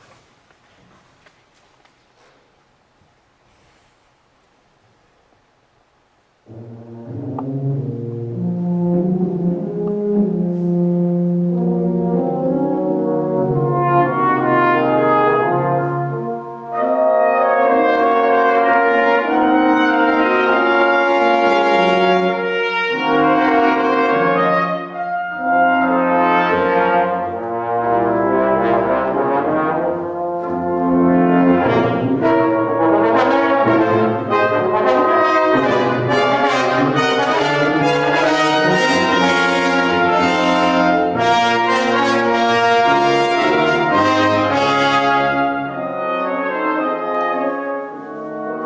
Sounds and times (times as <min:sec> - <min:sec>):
French horn: 0:06.4 - 0:48.6.